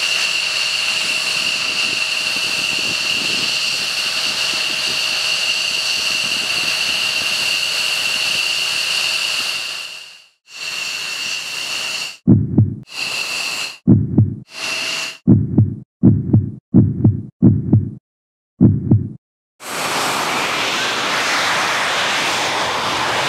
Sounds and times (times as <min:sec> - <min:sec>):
Fixed-wing aircraft, airplane: 0:00.0 - 0:12.2, 0:12.9 - 0:13.7, 0:14.5 - 0:15.2, 0:19.6 - 0:23.2.